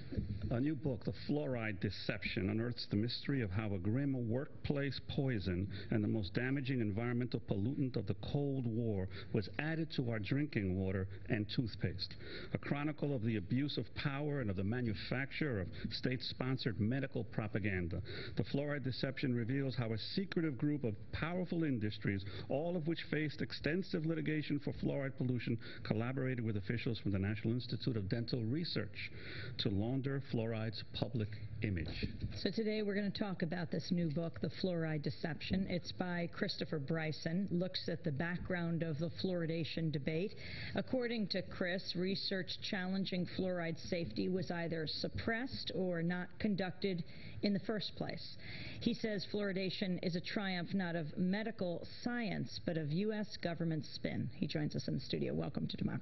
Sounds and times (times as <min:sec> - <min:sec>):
Speech: 0:00.1 - 0:56.0.